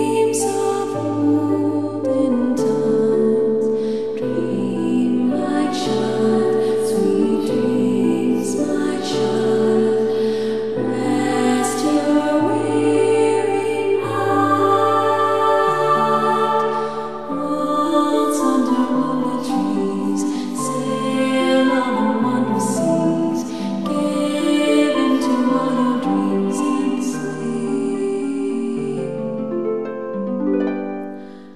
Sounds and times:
Music: 0.0s - 31.5s.

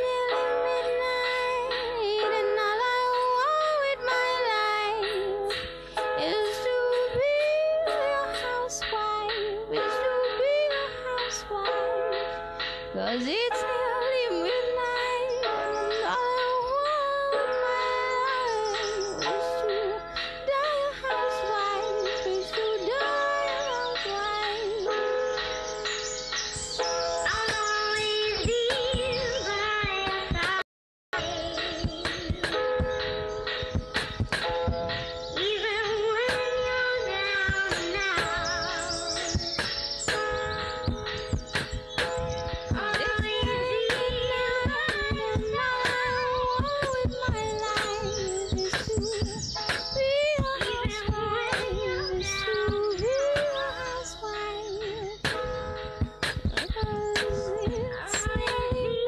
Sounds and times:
Music: 0.0s - 30.6s, 31.2s - 59.0s.

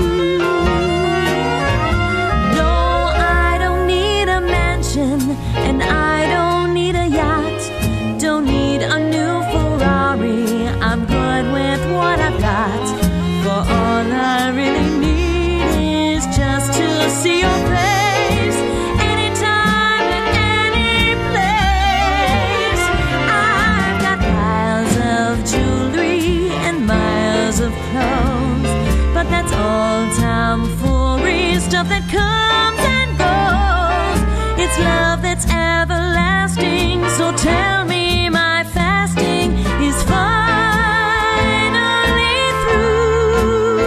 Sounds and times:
Christmas music: 0.0s - 43.8s.

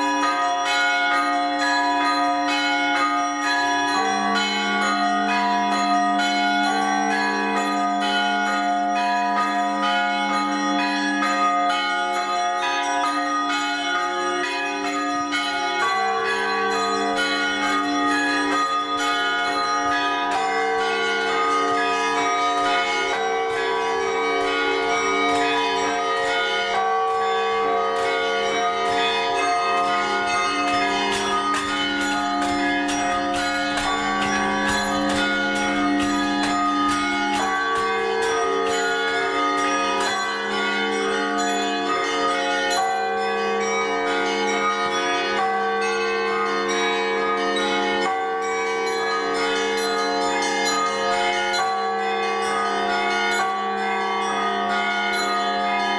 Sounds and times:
Change ringing (campanology): 0.0s - 55.9s.

